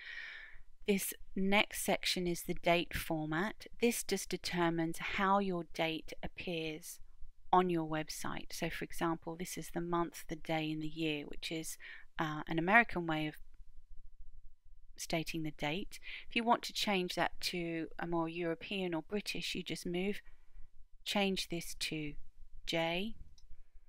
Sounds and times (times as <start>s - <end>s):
Speech: 0.9s - 7.0s, 7.6s - 13.4s, 15.0s - 20.2s, 21.1s - 23.2s.